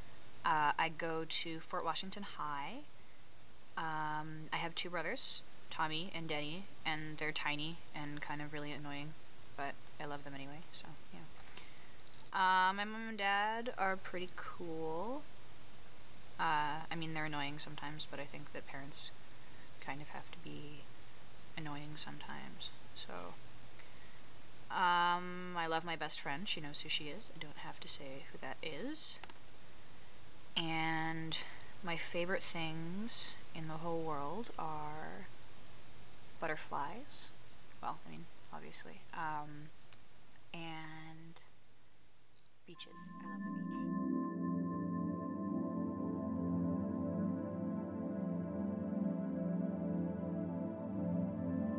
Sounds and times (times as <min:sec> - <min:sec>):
Speech: 0:00.4 - 0:02.9, 0:03.8 - 0:11.3, 0:12.4 - 0:15.3, 0:16.4 - 0:19.2, 0:19.8 - 0:20.9, 0:21.6 - 0:23.4, 0:24.7 - 0:29.3, 0:30.6 - 0:35.3, 0:36.4 - 0:39.7, 0:40.6 - 0:41.5, 0:42.7 - 0:43.3.